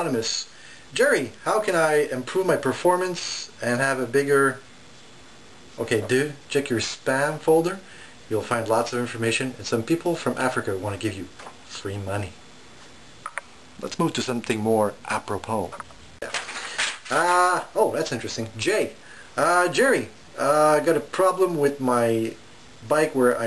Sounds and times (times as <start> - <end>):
Speech: 0.0 - 4.6, 5.8 - 12.4, 13.8 - 16.4, 17.1 - 23.4.